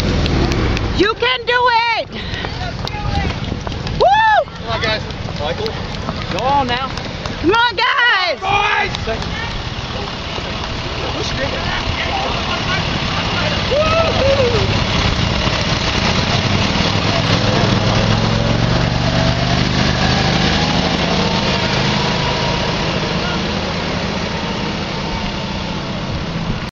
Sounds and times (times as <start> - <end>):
Truck: 0.0 - 26.7.